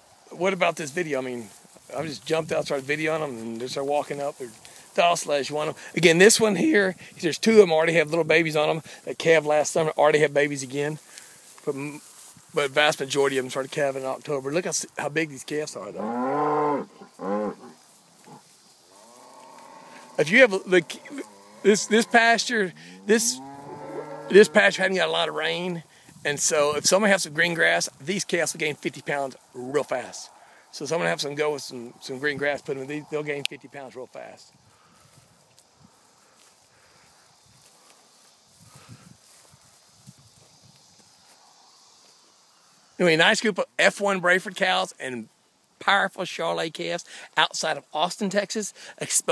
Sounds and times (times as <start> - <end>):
Speech: 0.4 - 11.0, 11.6 - 12.0, 12.6 - 16.0, 20.2 - 23.4, 24.3 - 34.5, 43.0 - 49.3.